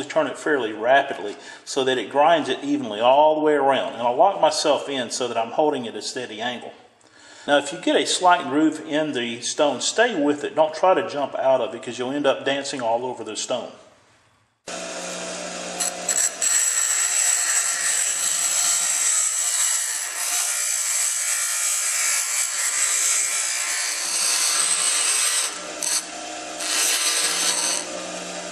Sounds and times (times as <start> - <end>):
Speech: 0.0 - 6.8, 7.5 - 13.9.